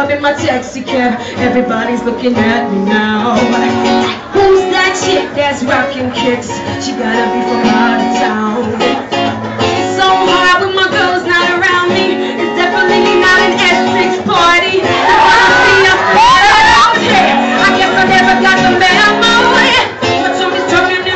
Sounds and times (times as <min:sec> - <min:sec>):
Female singing: 0:00.0 - 0:09.1, 0:09.8 - 0:21.1
Music: 0:00.0 - 0:21.1.